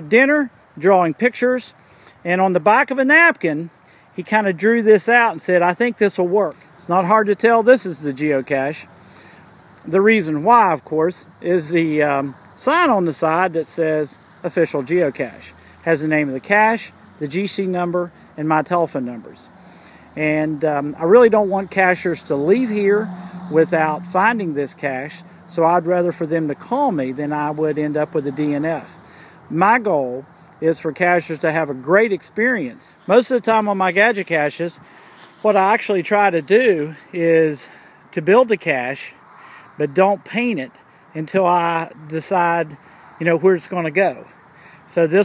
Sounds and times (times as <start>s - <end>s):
Speech: 0.0s - 8.9s, 9.8s - 19.5s, 20.2s - 34.8s, 35.4s - 39.2s, 39.8s - 44.3s, 44.9s - 45.2s
Outside, rural or natural: 0.0s - 45.2s.